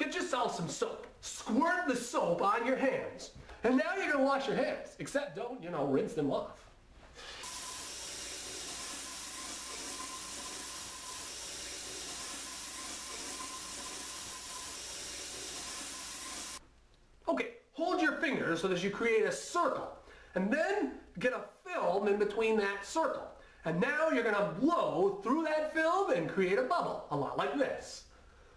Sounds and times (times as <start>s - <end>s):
Sink (filling or washing): 7.2s - 16.6s
Water tap, faucet: 7.3s - 16.6s.